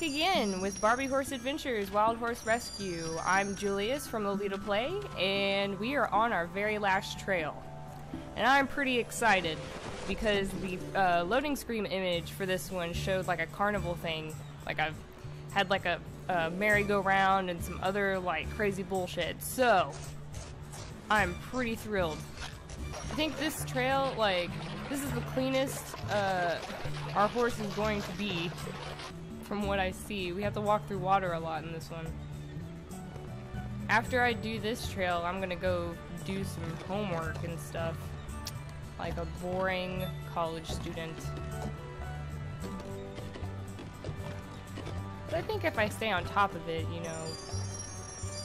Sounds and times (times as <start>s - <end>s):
Speech: 0.0s - 7.6s, 8.4s - 15.0s, 15.6s - 20.0s, 21.1s - 22.2s, 23.1s - 26.6s, 27.2s - 28.6s, 29.5s - 32.1s, 33.9s - 38.0s, 39.0s - 41.3s, 45.3s - 47.4s
Music: 0.0s - 48.4s.